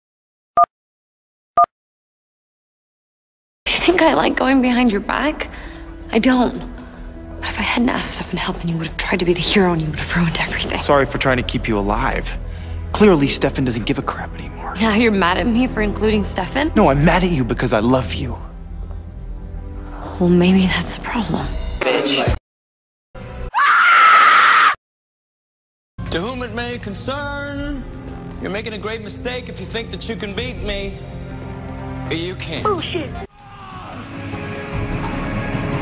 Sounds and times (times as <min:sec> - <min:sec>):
Music: 0:03.6 - 0:22.4, 0:23.2 - 0:23.6, 0:26.0 - 0:35.8
Speech: 0:21.2 - 0:22.4, 0:26.1 - 0:27.8, 0:28.4 - 0:31.0.